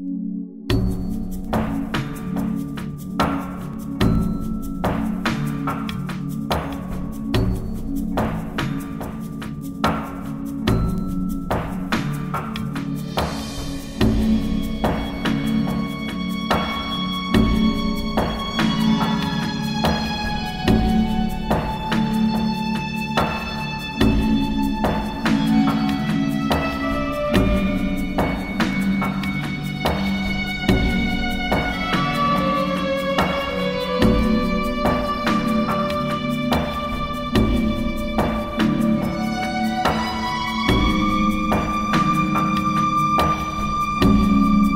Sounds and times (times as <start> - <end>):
Violin, fiddle: 14.2 - 44.7.